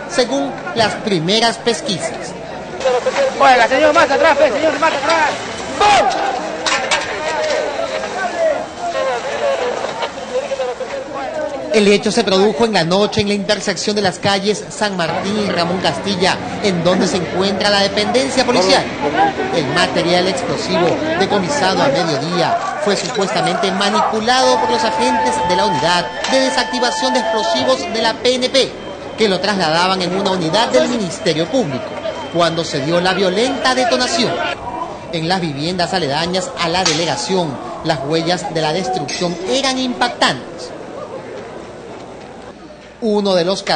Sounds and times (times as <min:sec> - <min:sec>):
Speech: 0:00.0 - 0:40.8, 0:43.0 - 0:43.7.